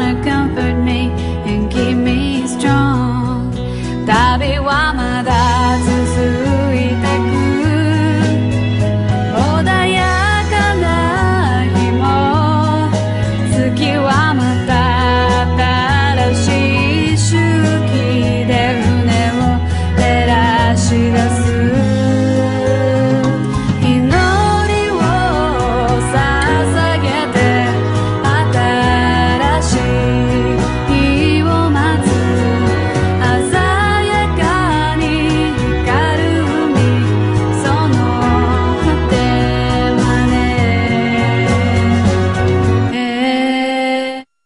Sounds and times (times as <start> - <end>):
Music: 0.0 - 44.4.